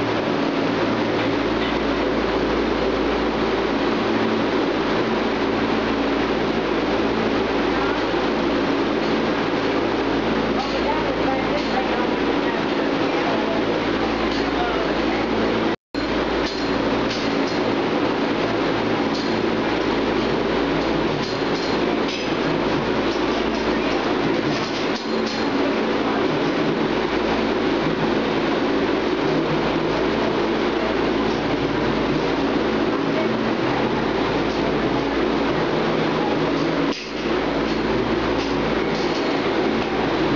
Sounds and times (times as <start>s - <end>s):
Speech: 10.5s - 15.7s.